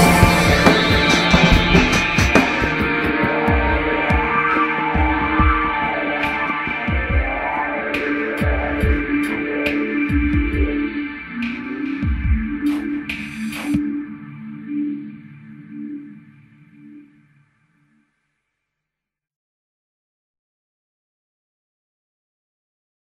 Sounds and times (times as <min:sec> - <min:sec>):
Music: 0:00.0 - 0:19.3.